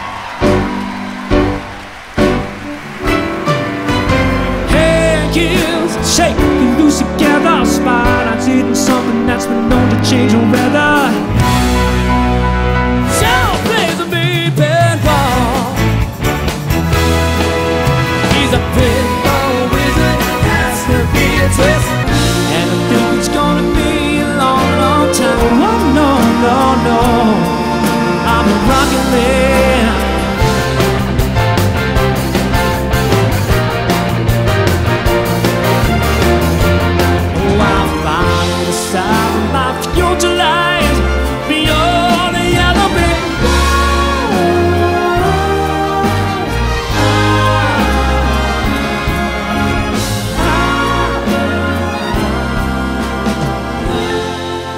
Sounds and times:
Exciting music: 0.0 - 54.7
Orchestra: 0.0 - 54.7.

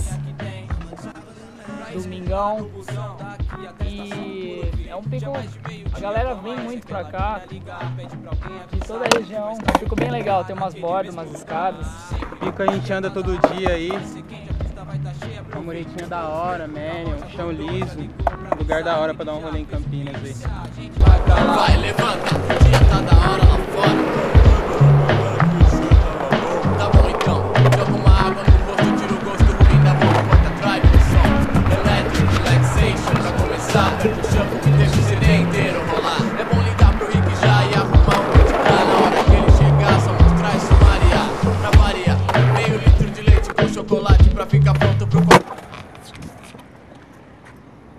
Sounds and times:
Music: 0.0 - 45.4
Skateboard: 8.4 - 14.4, 16.0 - 19.0, 20.1 - 47.6.

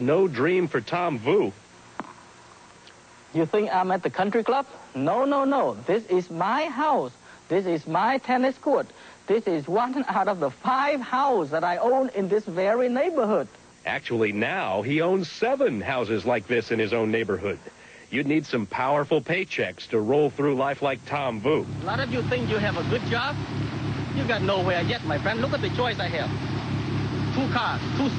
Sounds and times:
Speech: 0.0 - 1.6, 3.4 - 23.4, 24.2 - 26.3, 27.4 - 28.1.

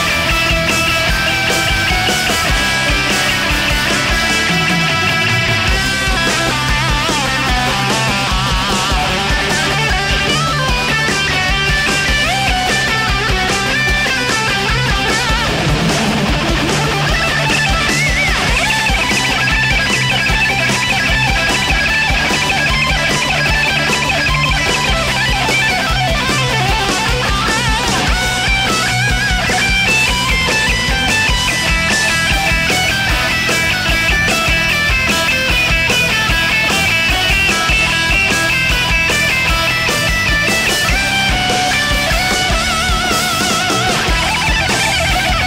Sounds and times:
Electric guitar: 0.0 - 45.4.

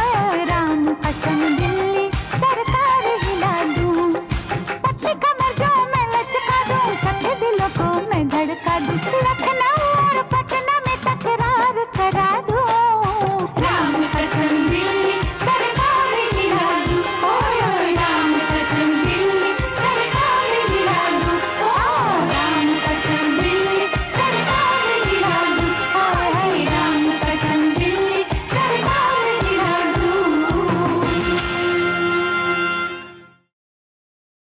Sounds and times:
Music of Asia: 0.0 - 33.3
Singing: 12.7 - 31.5.

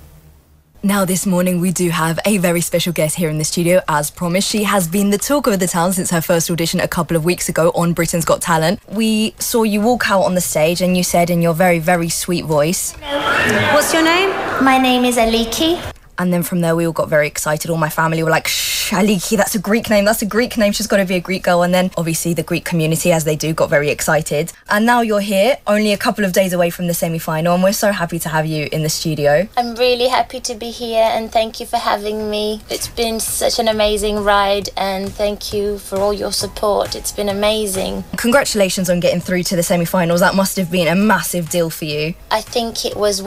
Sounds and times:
Speech: 0.8 - 43.2.

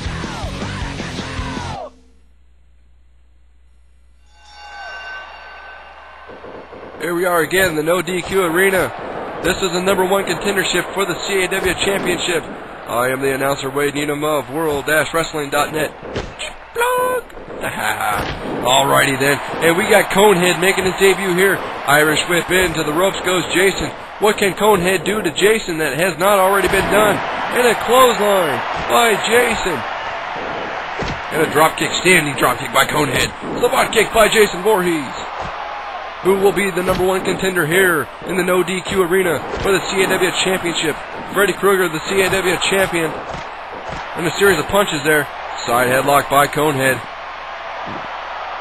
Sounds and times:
Speech: 7.0 - 29.8, 31.3 - 35.3, 36.2 - 43.2, 44.2 - 47.1.

